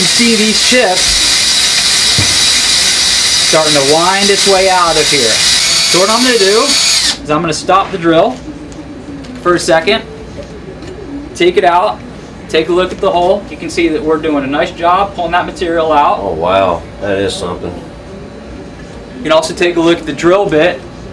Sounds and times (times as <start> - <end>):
Drill: 0.0 - 7.2.